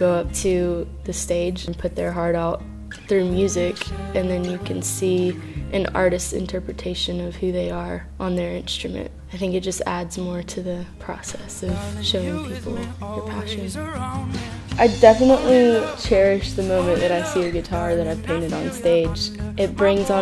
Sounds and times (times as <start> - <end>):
Speech: 0.0 - 13.8, 14.8 - 20.2
Music: 0.0 - 20.2.